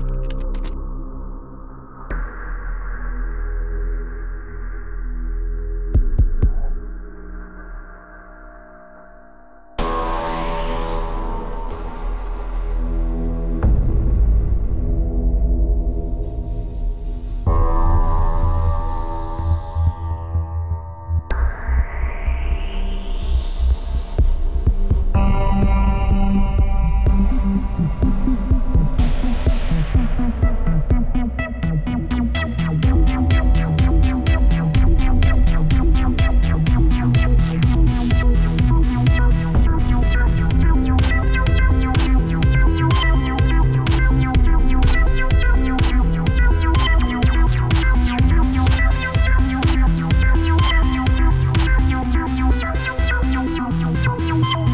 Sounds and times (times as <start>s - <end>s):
Music: 0.0s - 54.7s.